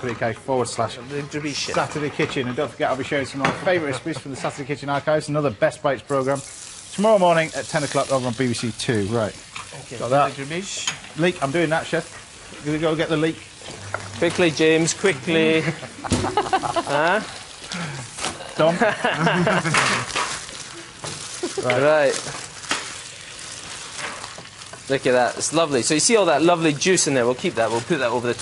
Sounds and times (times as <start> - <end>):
Speech: 0.0 - 6.4, 7.0 - 13.4, 24.9 - 28.4.